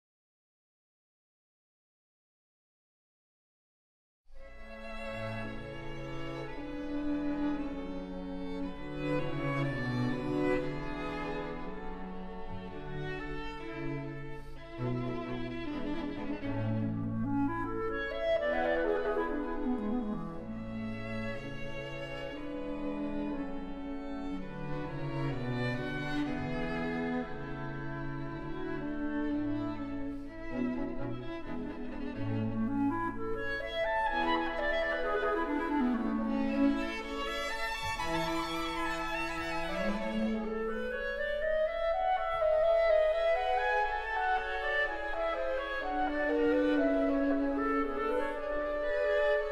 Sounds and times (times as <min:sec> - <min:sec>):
Music: 0:04.3 - 0:49.5.